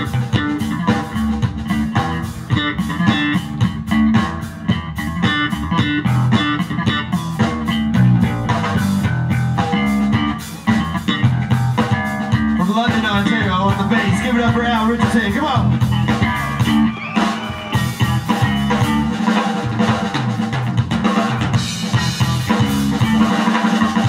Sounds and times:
Bass drum: 0.0s - 24.0s
Bass guitar: 0.0s - 24.0s
Blues: 0.0s - 24.0s
Drum kit: 0.0s - 24.0s.

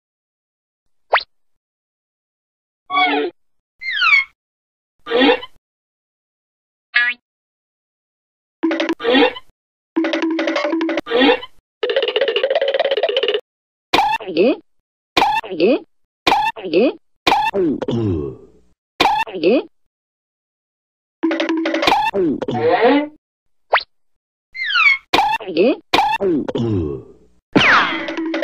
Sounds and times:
Sound effect: 1.1s - 1.3s, 8.6s - 13.4s, 23.7s - 23.9s, 27.6s - 28.4s.

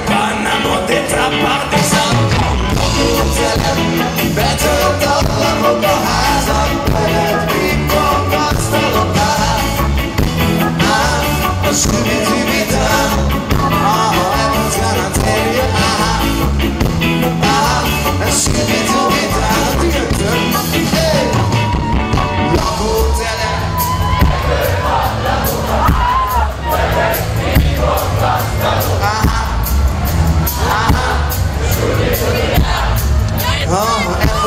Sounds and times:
Rock and roll: 0.0s - 34.4s
Ska: 0.0s - 34.4s.

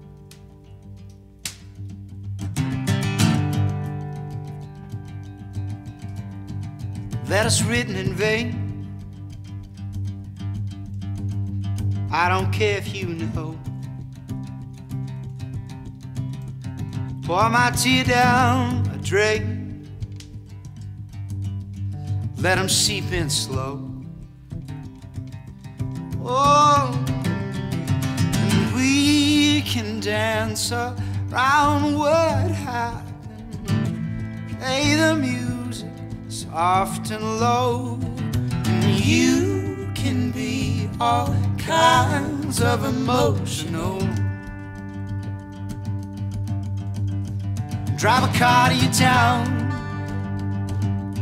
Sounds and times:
Music: 0.0s - 51.2s.

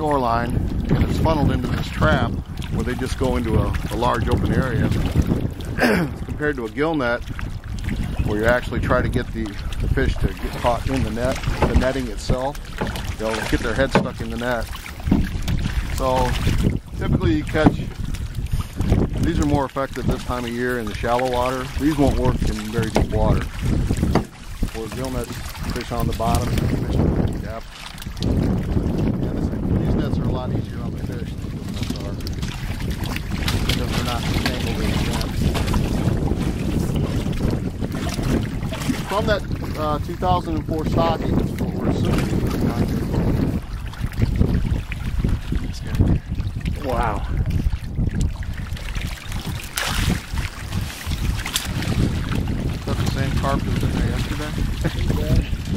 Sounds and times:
Wind noise (microphone): 0.0s - 55.7s.

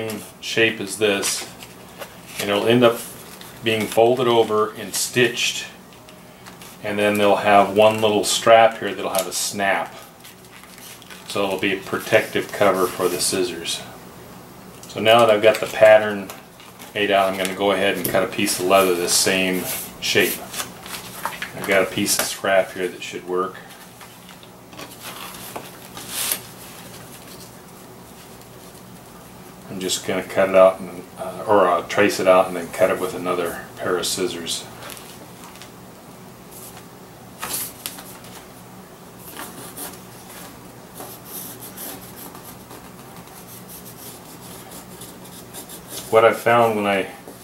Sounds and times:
Speech: 0.0s - 1.5s, 2.4s - 5.8s, 6.8s - 10.1s, 11.3s - 14.0s, 14.9s - 20.6s, 21.5s - 23.7s, 29.7s - 34.7s, 46.0s - 47.2s
Inside, small room: 0.0s - 47.4s.

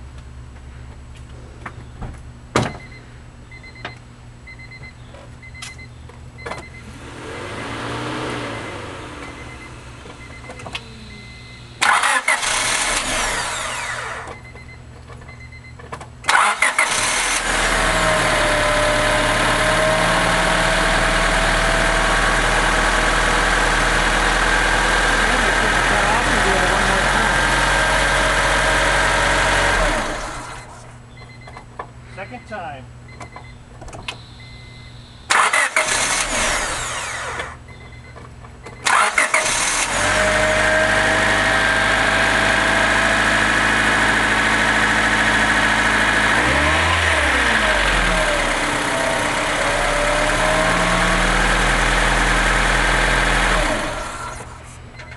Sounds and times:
Vehicle: 0.0s - 55.1s
Engine starting: 11.8s - 14.3s, 16.3s - 17.6s, 35.3s - 37.6s, 38.8s - 40.2s.

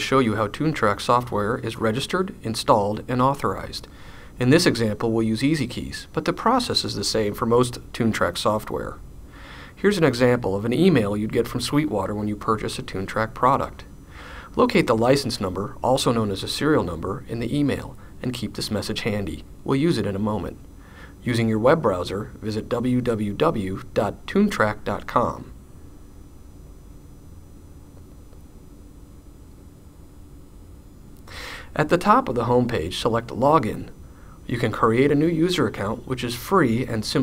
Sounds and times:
Speech: 0.0s - 9.0s, 9.8s - 13.9s, 14.5s - 20.6s, 21.2s - 25.6s, 31.7s - 37.2s.

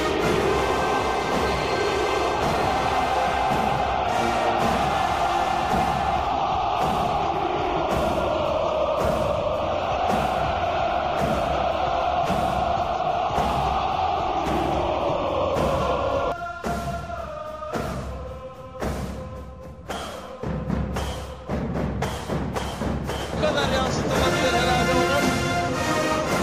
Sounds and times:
Music: 0.0s - 26.4s.

